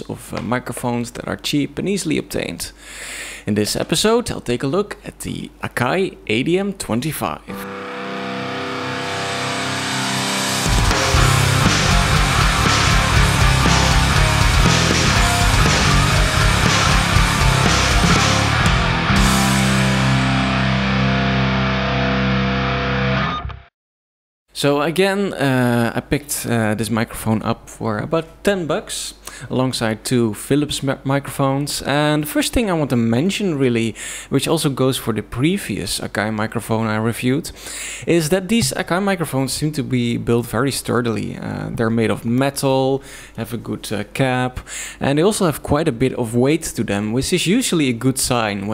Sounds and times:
Speech: 0:00.0 - 0:02.8, 0:03.5 - 0:07.5, 0:24.5 - 0:48.7
Music: 0:07.5 - 0:23.7.

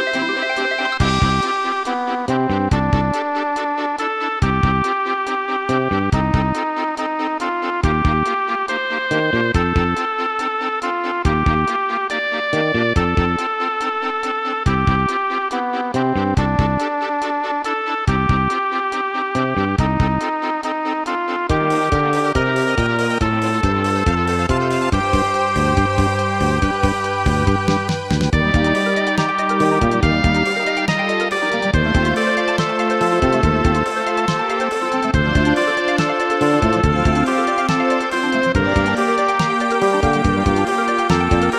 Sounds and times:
Music: 0:00.0 - 0:41.5.

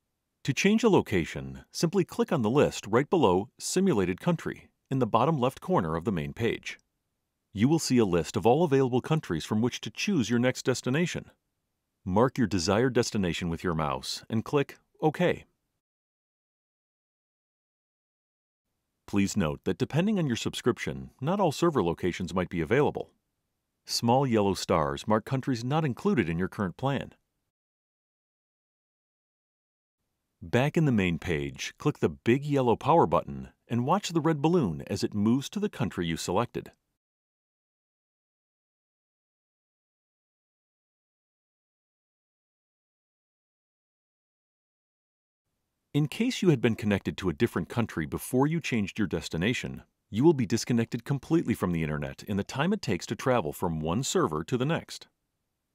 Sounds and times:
Speech: 0:00.5 - 0:06.8, 0:07.6 - 0:11.4, 0:12.1 - 0:15.5, 0:19.1 - 0:23.1, 0:23.9 - 0:27.2, 0:30.4 - 0:36.8, 0:46.0 - 0:55.1.

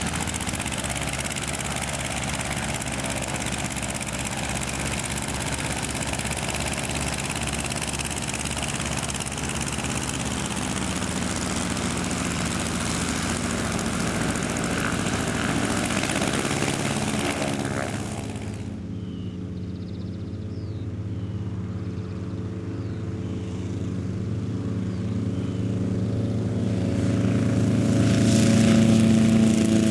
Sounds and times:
Fixed-wing aircraft, airplane: 0:00.0 - 0:29.9
Helicopter: 0:00.0 - 0:29.9.

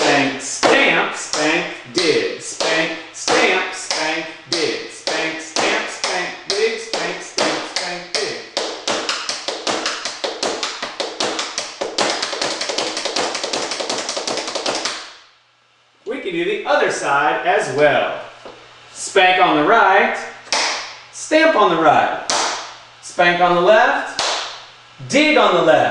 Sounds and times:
Speech: 0:00.0 - 0:08.5, 0:16.0 - 0:18.3, 0:19.0 - 0:20.4, 0:21.2 - 0:22.3, 0:23.0 - 0:24.2, 0:25.0 - 0:25.9.

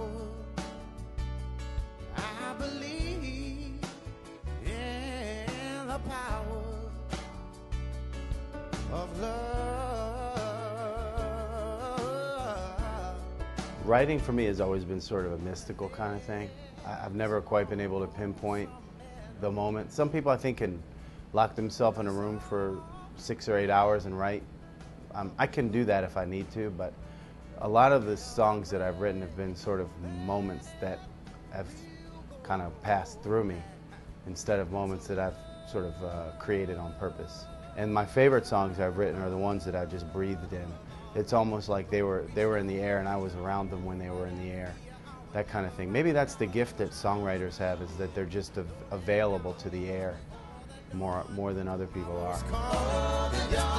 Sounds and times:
Music: 0:00.0 - 0:53.7
Speech: 0:13.8 - 0:18.8, 0:19.4 - 0:20.8, 0:21.4 - 0:24.4, 0:25.1 - 0:27.0, 0:27.6 - 0:50.2, 0:50.9 - 0:52.6.

